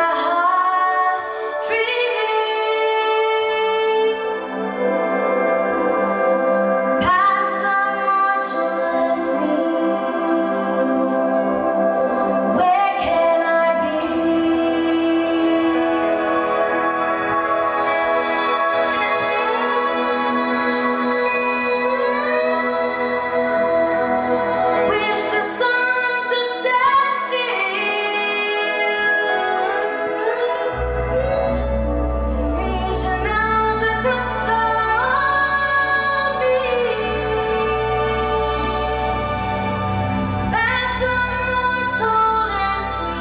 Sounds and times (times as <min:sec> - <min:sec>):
Singing: 0:00.0 - 0:05.5, 0:06.9 - 0:43.2
Inside, large room or hall: 0:00.0 - 0:43.2
Music: 0:00.0 - 0:43.2.